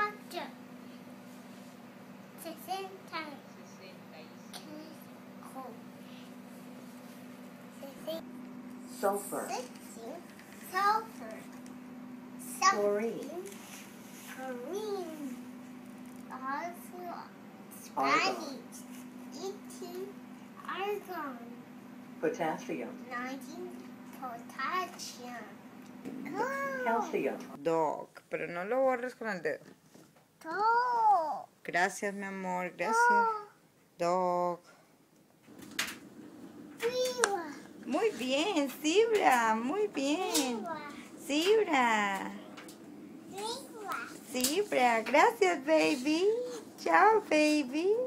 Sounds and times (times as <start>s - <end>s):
Child speech, kid speaking: 0.0s - 0.6s, 2.4s - 3.6s, 4.5s - 5.9s, 7.8s - 8.3s, 9.2s - 11.6s, 12.4s - 13.6s, 14.3s - 15.5s, 16.3s - 21.6s, 23.0s - 25.6s, 26.3s - 27.4s, 30.4s - 31.5s, 32.8s - 33.6s, 36.8s - 38.2s, 40.0s - 41.5s, 43.3s - 44.5s, 45.9s - 46.7s
Inside, small room: 0.0s - 48.0s.